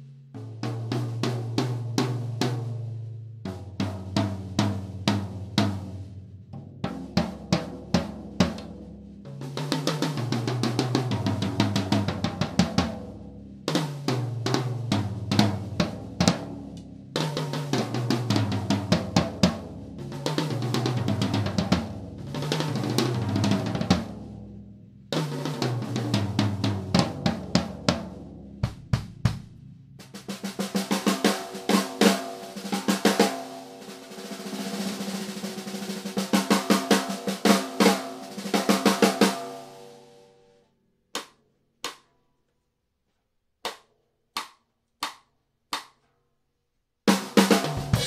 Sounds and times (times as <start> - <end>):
Bass drum: 0.0 - 32.0, 47.4 - 48.0
Drum kit: 0.0 - 40.1, 47.1 - 48.0.